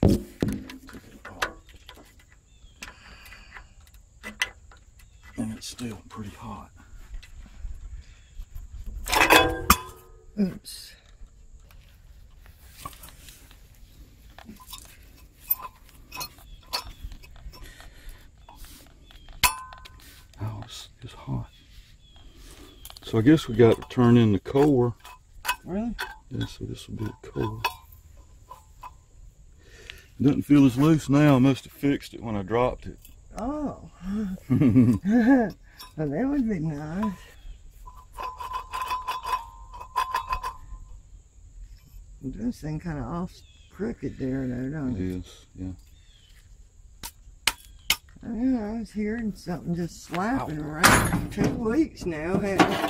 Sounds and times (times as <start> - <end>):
Speech: 5.4 - 6.8, 20.4 - 21.6, 23.0 - 25.0, 30.2 - 33.9, 42.2 - 45.8, 48.2 - 52.8.